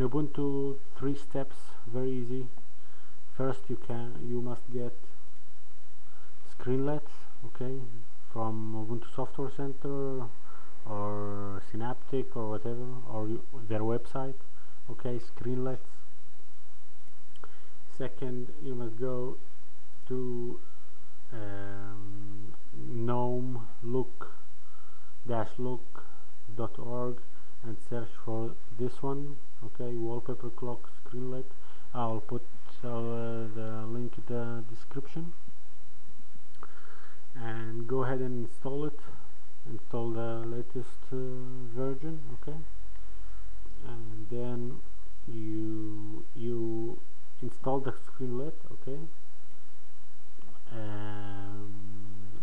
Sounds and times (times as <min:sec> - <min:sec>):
Speech: 0:00.0 - 0:02.6, 0:03.3 - 0:05.2, 0:06.4 - 0:16.1, 0:17.9 - 0:20.7, 0:21.3 - 0:24.5, 0:25.2 - 0:35.4, 0:37.3 - 0:42.8, 0:43.8 - 0:49.2, 0:50.5 - 0:52.4.